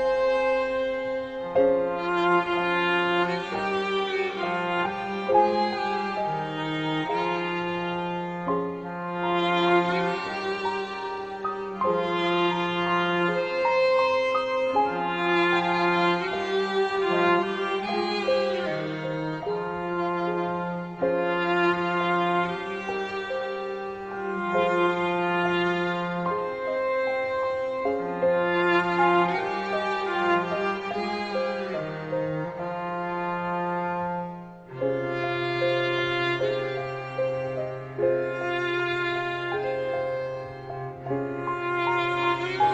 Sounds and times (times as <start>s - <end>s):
Violin, fiddle: 0.0s - 42.7s.